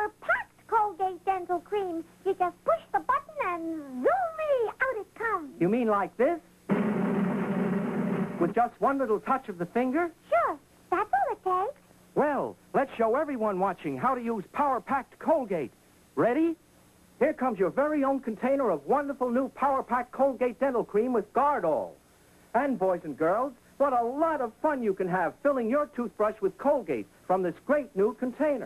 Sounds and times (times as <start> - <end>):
Speech: 0.0 - 6.4, 8.4 - 16.6, 17.2 - 22.0, 22.6 - 28.6.